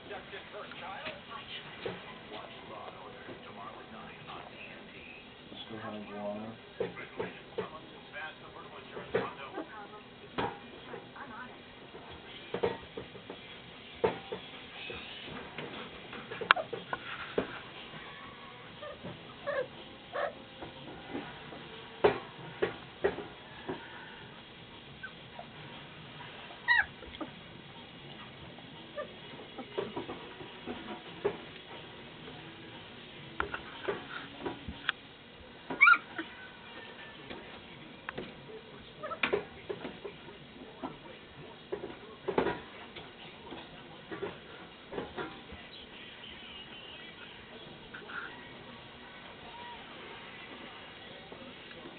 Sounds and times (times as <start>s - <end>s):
Animal: 26.2s - 27.4s, 39.0s - 39.4s.